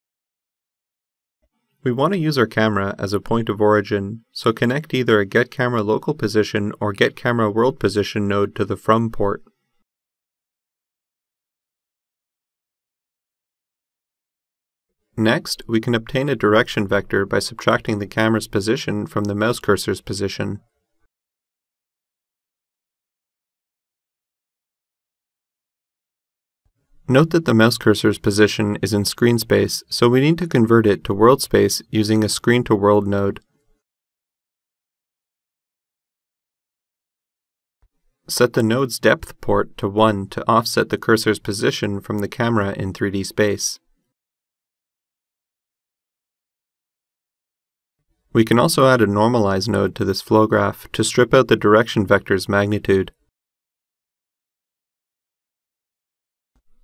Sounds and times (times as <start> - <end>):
Speech: 1.9 - 9.5, 15.2 - 20.6, 27.1 - 33.4, 38.3 - 43.8, 48.4 - 53.2.